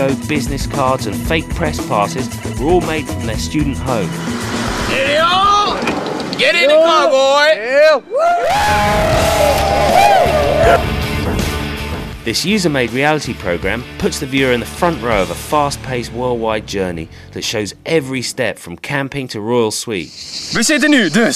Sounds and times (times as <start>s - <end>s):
Speech: 0.0s - 4.1s, 4.9s - 8.0s, 12.2s - 21.3s
Music: 0.0s - 18.9s.